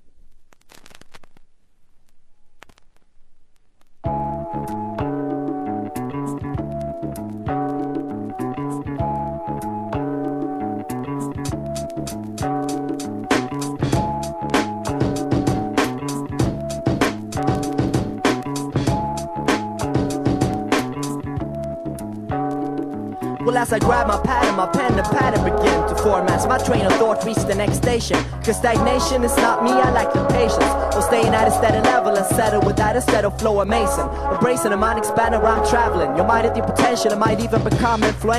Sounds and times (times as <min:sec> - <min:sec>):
Music: 0:04.0 - 0:38.3.